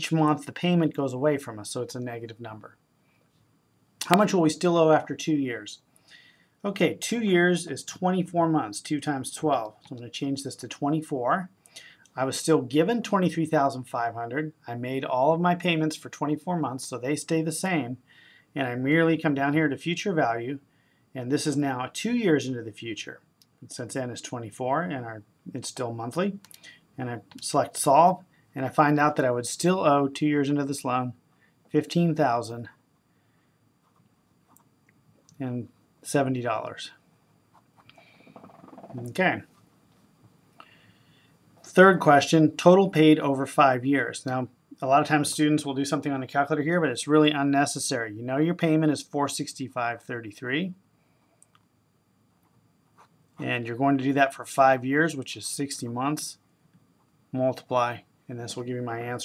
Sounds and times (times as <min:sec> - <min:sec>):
Speech: 0:00.0 - 0:02.8, 0:04.0 - 0:05.9, 0:06.6 - 0:18.0, 0:18.6 - 0:20.6, 0:21.2 - 0:32.8, 0:35.3 - 0:37.0, 0:38.9 - 0:39.5, 0:41.7 - 0:50.8, 0:53.4 - 0:56.4, 0:57.3 - 0:59.2.